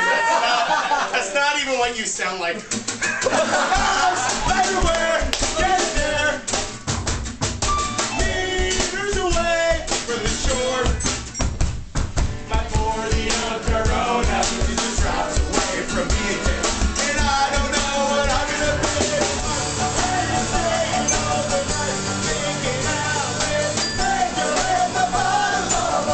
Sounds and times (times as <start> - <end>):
Speech: 1.1 - 2.7
Music: 2.6 - 26.1.